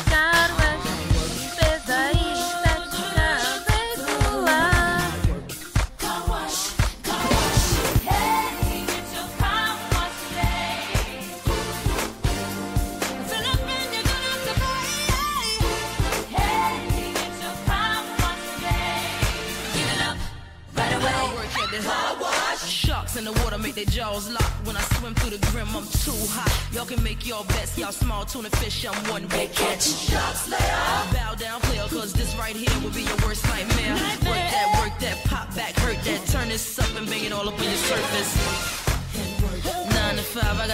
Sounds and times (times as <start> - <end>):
Music: 0.0 - 40.7.